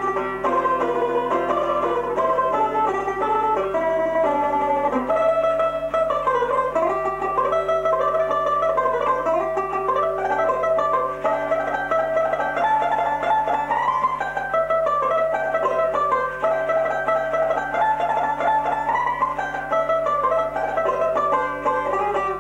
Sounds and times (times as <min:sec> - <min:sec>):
Banjo: 0:00.0 - 0:22.4
Zither: 0:00.0 - 0:22.4.